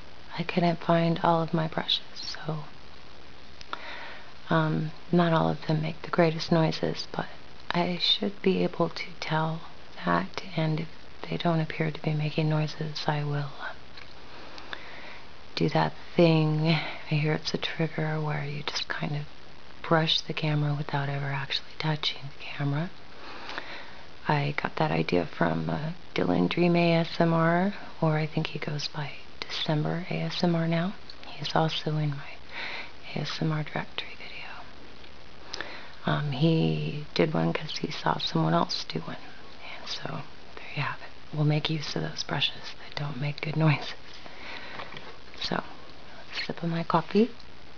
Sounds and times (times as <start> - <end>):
Speech: 0.3 - 2.7, 4.4 - 13.8, 15.6 - 23.0, 24.2 - 32.4, 33.0 - 34.7, 36.0 - 44.0, 45.4 - 47.4.